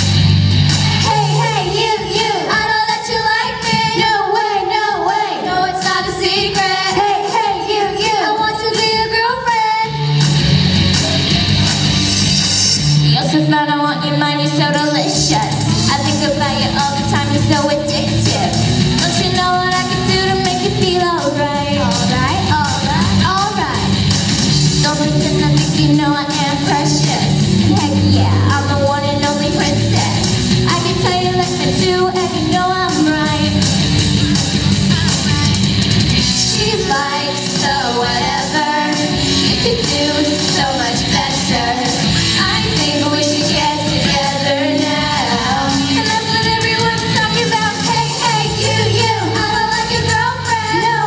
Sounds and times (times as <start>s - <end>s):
Music: 0.0s - 51.0s.